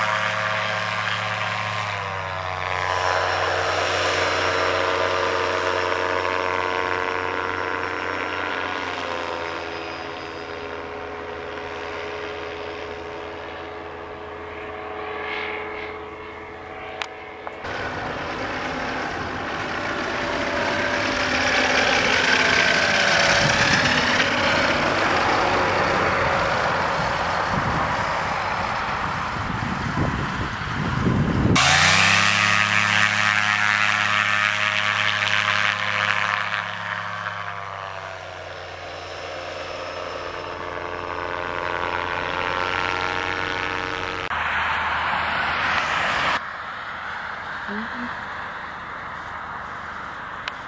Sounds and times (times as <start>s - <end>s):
Aircraft: 0.0s - 50.6s
Engine: 0.0s - 50.6s.